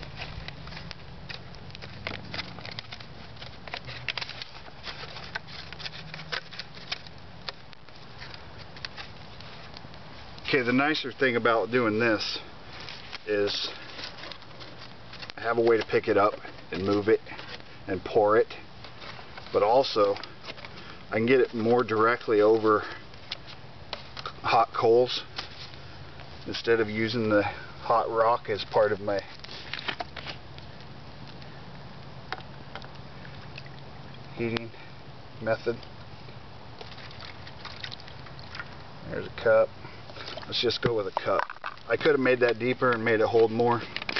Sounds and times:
Outside, rural or natural: 0:00.0 - 0:44.1
Speech: 0:10.5 - 0:12.5, 0:13.3 - 0:13.8, 0:15.4 - 0:18.6, 0:19.5 - 0:20.2, 0:21.1 - 0:23.0, 0:24.4 - 0:25.3, 0:26.4 - 0:29.3, 0:34.3 - 0:34.8, 0:35.4 - 0:35.8, 0:39.0 - 0:39.7, 0:40.5 - 0:43.9
Water: 0:33.1 - 0:34.4, 0:36.8 - 0:41.8.

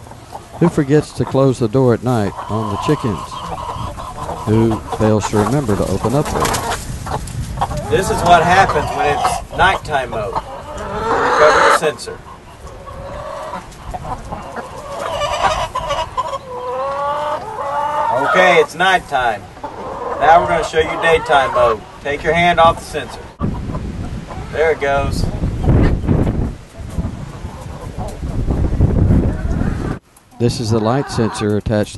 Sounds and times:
Cluck: 0:02.1 - 0:21.9, 0:22.6 - 0:24.6, 0:26.7 - 0:28.7, 0:30.4 - 0:31.6.

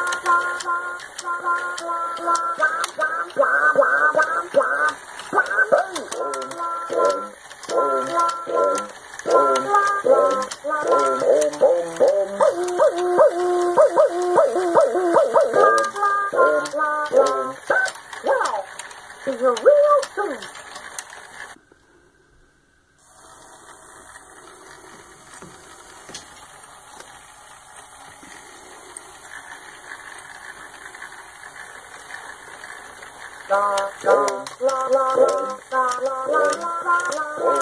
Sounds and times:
Music: 0:00.0 - 0:13.1, 0:14.2 - 0:18.4, 0:33.5 - 0:37.6.

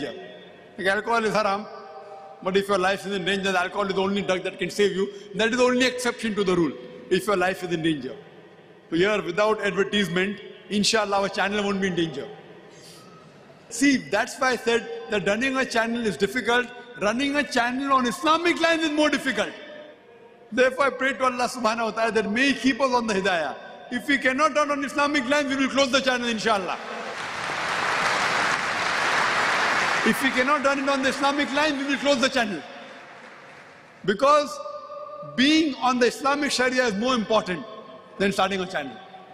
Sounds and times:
Speech: 0:00.0 - 0:00.2, 0:00.8 - 0:01.7, 0:02.4 - 0:08.2, 0:08.9 - 0:12.4, 0:13.7 - 0:19.6, 0:20.5 - 0:26.8, 0:30.0 - 0:32.6, 0:34.1 - 0:34.6, 0:35.2 - 0:37.6, 0:38.2 - 0:39.0.

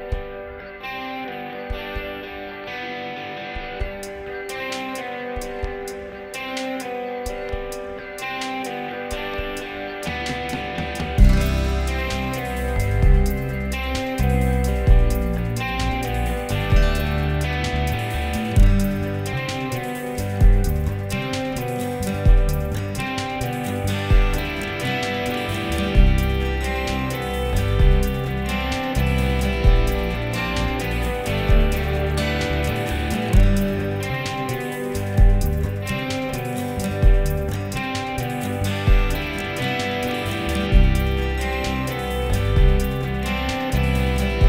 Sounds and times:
Music of Latin America: 0:00.0 - 0:44.4.

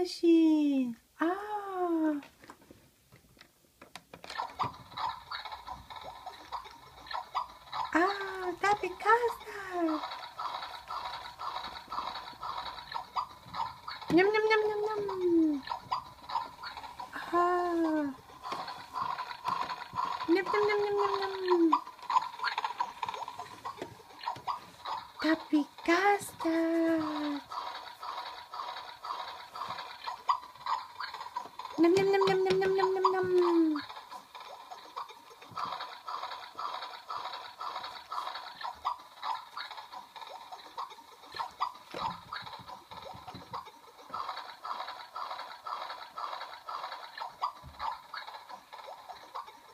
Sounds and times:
Speech: 0:00.0 - 0:02.3, 0:08.0 - 0:10.0, 0:14.1 - 0:15.6, 0:17.2 - 0:18.2, 0:20.3 - 0:21.8, 0:25.2 - 0:27.4, 0:31.8 - 0:33.8
Inside, small room: 0:00.0 - 0:49.7.

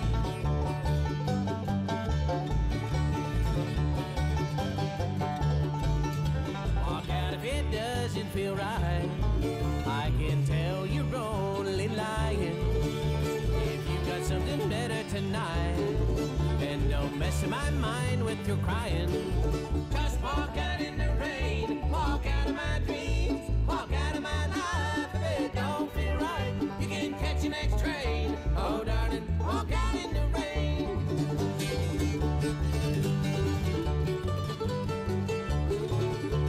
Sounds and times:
Music: 0:00.0 - 0:36.4.

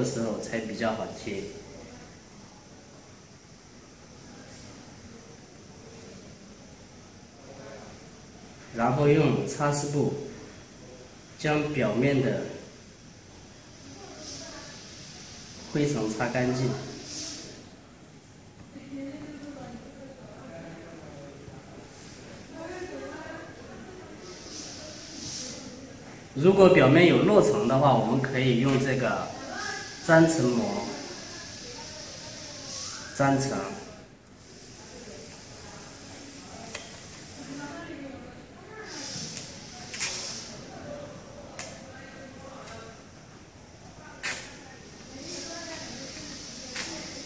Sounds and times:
Speech: 0:13.8 - 0:17.8, 0:18.6 - 0:47.2.

